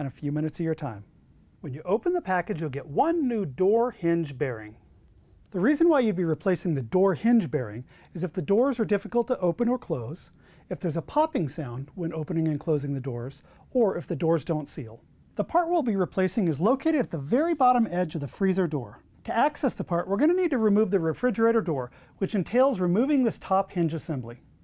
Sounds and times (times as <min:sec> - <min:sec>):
Speech: 0:00.0 - 0:04.8, 0:05.5 - 0:24.5.